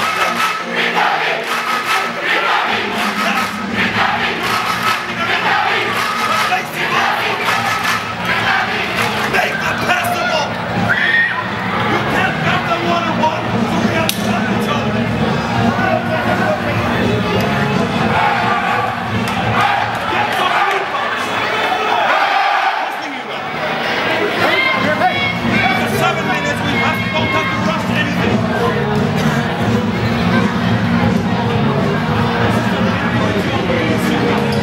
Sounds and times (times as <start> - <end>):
Cheering: 0.0 - 14.4, 15.2 - 34.6
Music: 0.0 - 21.3, 24.4 - 34.6
Speech: 9.3 - 10.6, 11.8 - 17.9, 22.8 - 34.6.